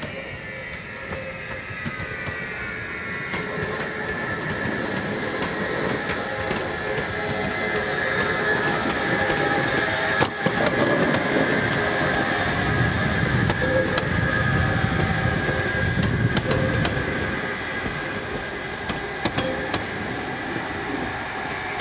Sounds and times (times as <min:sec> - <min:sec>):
Clickety-clack: 0:00.0 - 0:02.5, 0:03.2 - 0:12.7, 0:13.4 - 0:20.0
Railroad car, train wagon: 0:00.0 - 0:21.8
Train: 0:00.0 - 0:21.8.